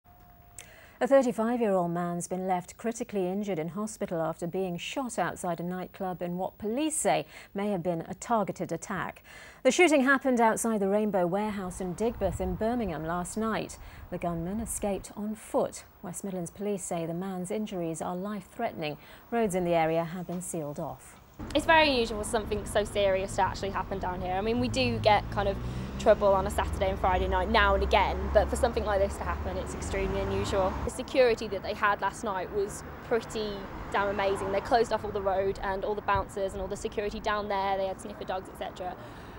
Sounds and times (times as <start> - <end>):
Speech: 1.0 - 39.0.